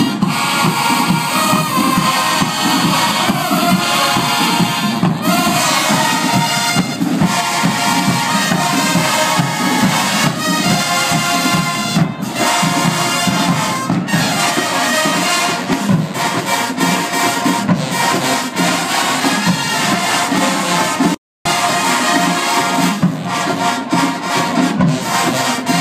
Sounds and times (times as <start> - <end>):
Music: 0.0 - 25.8.